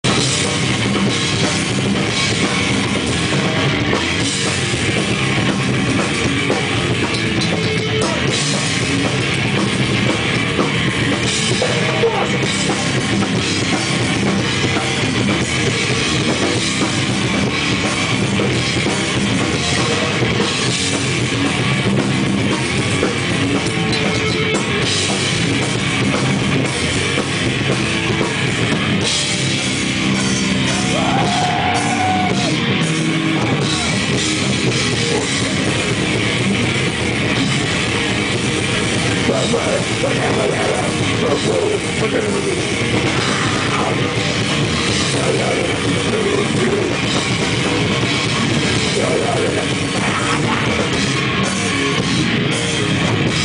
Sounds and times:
Drum: 0:00.0 - 0:53.4
Rock music: 0:00.0 - 0:53.4.

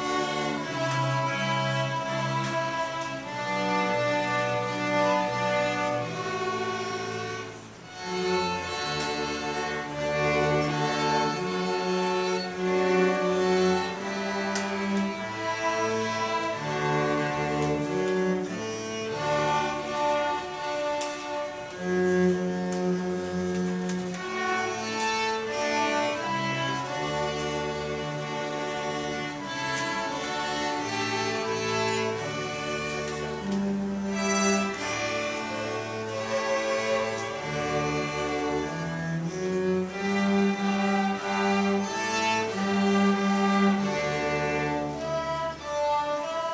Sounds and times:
Orchestra: 0:00.0 - 0:46.5.

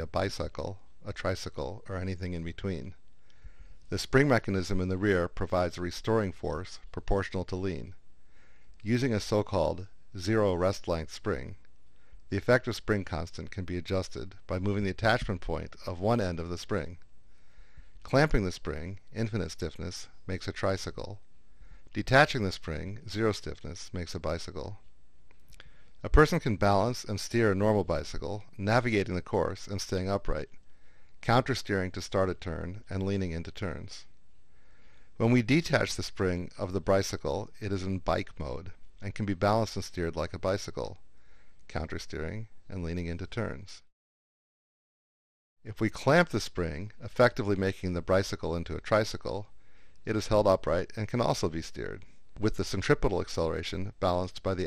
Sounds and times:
Speech: 0:00.0 - 0:03.0, 0:03.9 - 0:08.0, 0:08.8 - 0:11.7, 0:12.3 - 0:17.0, 0:18.0 - 0:21.2, 0:21.9 - 0:24.8, 0:26.0 - 0:30.6, 0:31.2 - 0:34.1, 0:35.2 - 0:41.0, 0:41.7 - 0:43.9, 0:45.7 - 0:54.6.

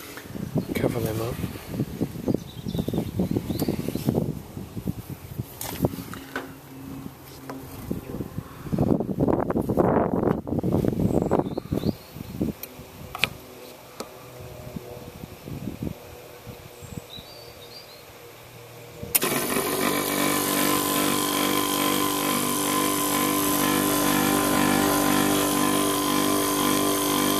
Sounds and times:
Outside, rural or natural: 0:00.0 - 0:27.3
Speech: 0:00.7 - 0:01.4.

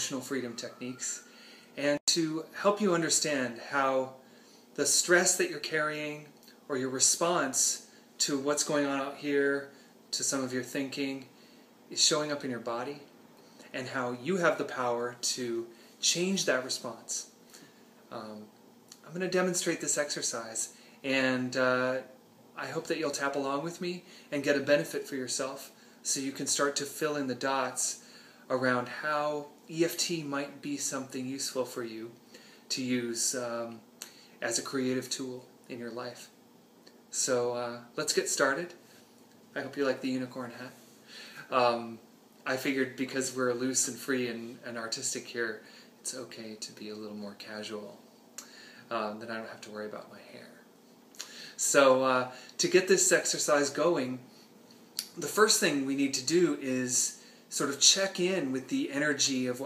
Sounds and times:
Speech: 0:00.0 - 0:04.2, 0:04.8 - 0:13.1, 0:13.7 - 0:17.4, 0:18.1 - 0:36.4, 0:37.1 - 0:38.8, 0:39.5 - 0:40.8, 0:41.4 - 0:48.0, 0:48.9 - 0:50.7, 0:51.6 - 0:54.3, 0:55.0 - 0:59.6.

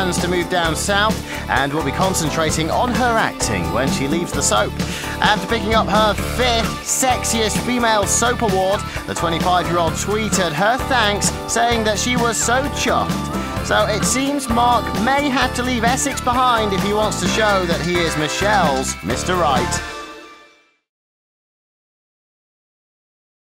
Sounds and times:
Speech: 0:00.0 - 0:19.9
Music: 0:00.0 - 0:20.9.

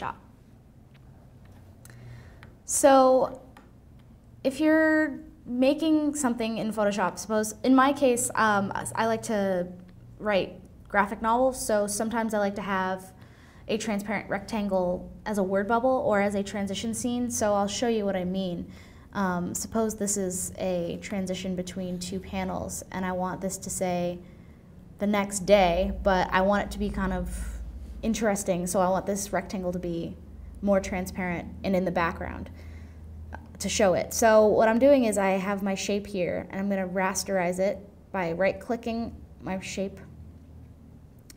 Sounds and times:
Speech: 0:00.0 - 0:00.3, 0:02.7 - 0:03.6, 0:04.4 - 0:24.3, 0:25.0 - 0:32.6, 0:33.3 - 0:40.1.

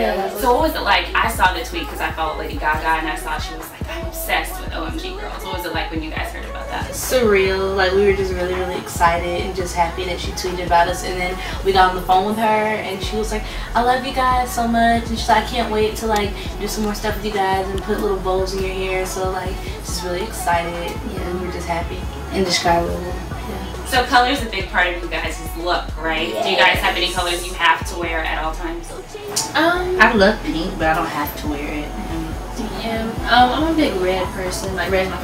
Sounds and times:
Music: 0:00.0 - 0:35.2
Speech: 0:00.0 - 0:35.2.

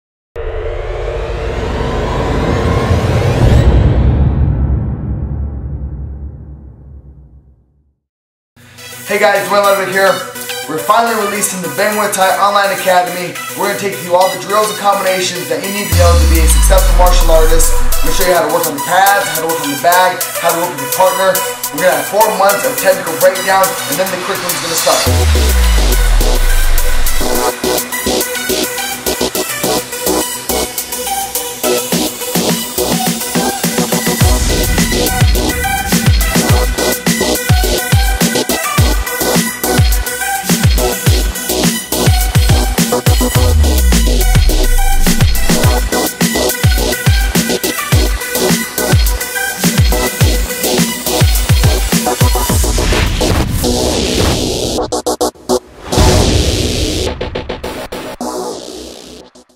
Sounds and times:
Music: 0:00.4 - 0:08.0, 0:08.6 - 0:59.5.

